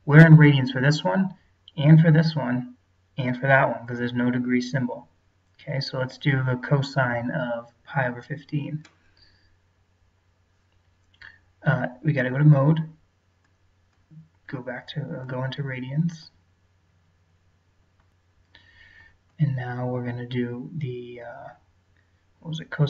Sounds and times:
Speech: 0.0s - 8.9s, 11.6s - 13.0s, 14.5s - 16.4s, 19.4s - 21.6s, 22.4s - 22.8s.

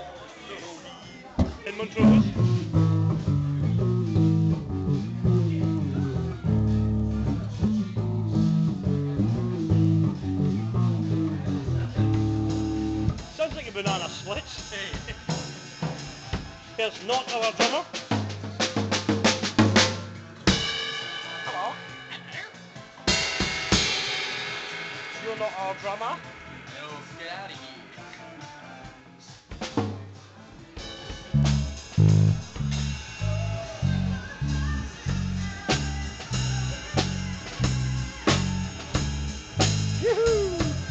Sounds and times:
Speech: 0.0s - 2.6s, 13.2s - 15.1s, 16.8s - 17.9s, 21.2s - 22.6s, 25.2s - 27.9s
Strum: 1.4s - 14.1s, 31.3s - 40.9s
Bass guitar: 1.4s - 16.6s, 18.0s - 20.8s, 29.6s - 40.9s.

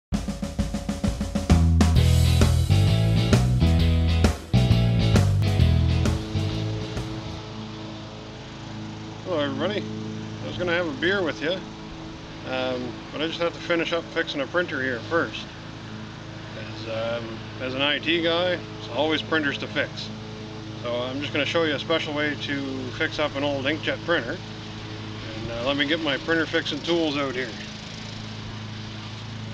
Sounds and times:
Music: 0.1s - 26.3s
Speech: 9.3s - 11.7s, 12.4s - 15.5s, 16.6s - 20.1s, 20.8s - 24.4s, 25.2s - 27.7s.

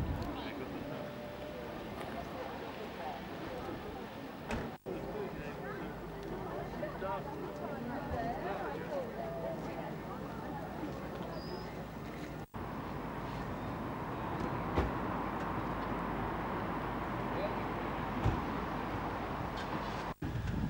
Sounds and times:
Speech: 0.0s - 12.0s, 17.3s - 17.8s.

